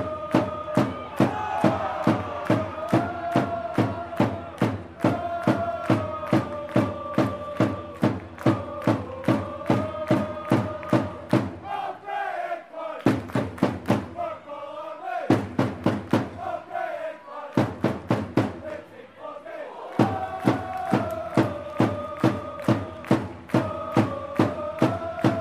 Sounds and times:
Mantra: 0:00.0 - 0:25.4.

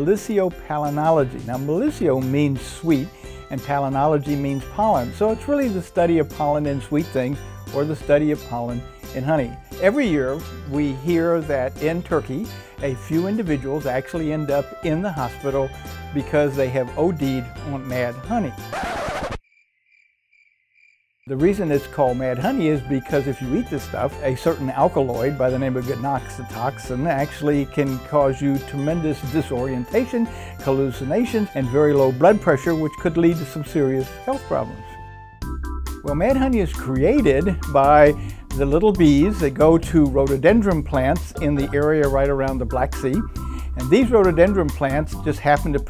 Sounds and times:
Speech: 0:00.0 - 0:18.7, 0:21.3 - 0:34.8, 0:36.1 - 0:45.9
Music: 0:00.0 - 0:19.2, 0:21.3 - 0:45.9.

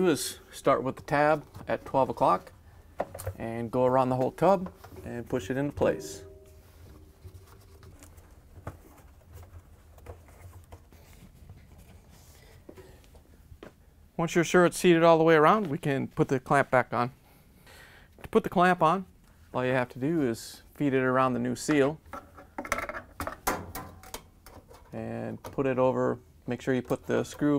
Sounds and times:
Speech: 0:00.0 - 0:02.5, 0:03.4 - 0:06.3, 0:14.2 - 0:17.2, 0:18.3 - 0:22.0, 0:24.9 - 0:27.5.

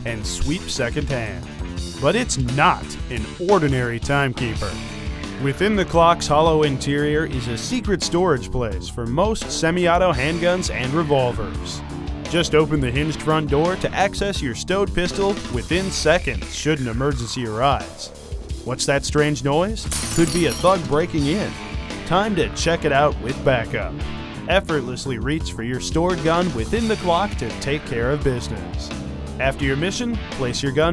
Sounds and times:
Speech: 0:00.0 - 0:04.8, 0:05.4 - 0:30.9
Music: 0:00.0 - 0:30.9.

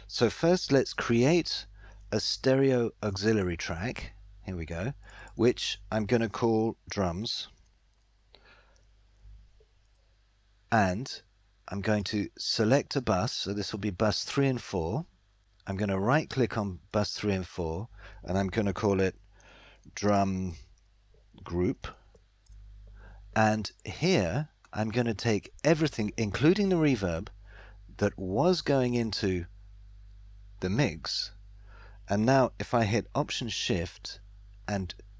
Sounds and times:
Speech: 0:00.1 - 0:07.6, 0:10.7 - 0:19.2, 0:19.9 - 0:20.7, 0:21.4 - 0:22.0, 0:23.4 - 0:27.3, 0:28.0 - 0:29.5, 0:30.6 - 0:31.4, 0:32.1 - 0:35.0.

